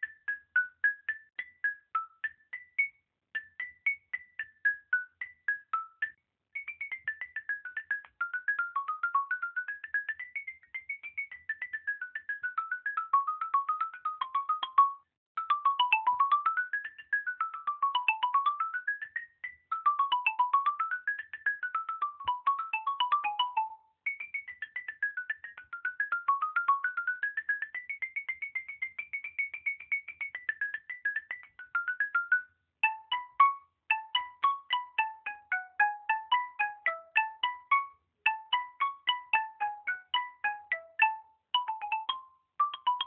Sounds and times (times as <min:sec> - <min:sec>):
Marimba, xylophone: 0:00.0 - 0:43.0.